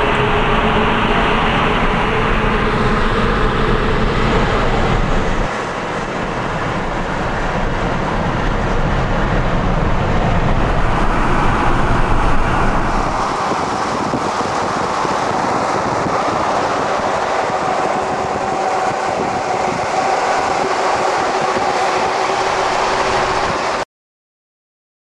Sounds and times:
Vehicle: 0.0 - 23.8.

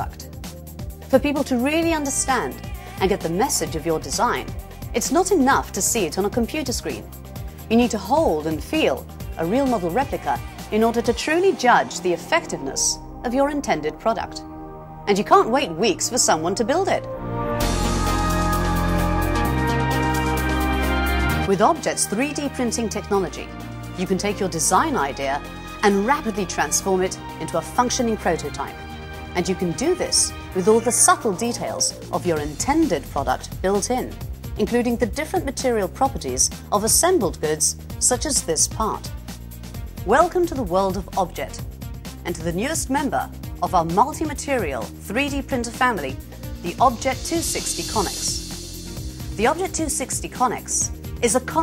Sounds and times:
Music: 0.0 - 51.6
Speech: 1.1 - 7.1, 7.7 - 14.4, 15.1 - 17.1, 21.5 - 28.8, 29.4 - 39.1, 40.1 - 41.6, 42.2 - 48.4, 49.4 - 51.6.

